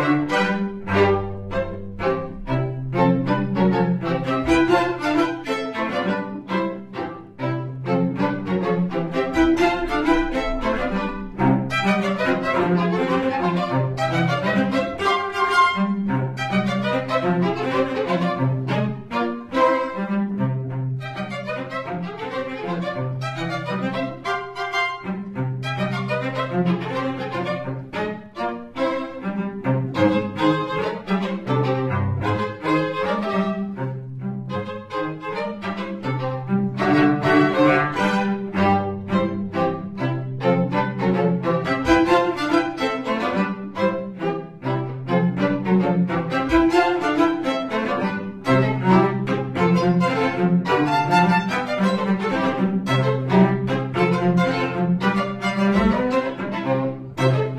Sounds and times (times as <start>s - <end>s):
Cello: 0.0s - 57.5s
Violin, fiddle: 0.0s - 57.5s.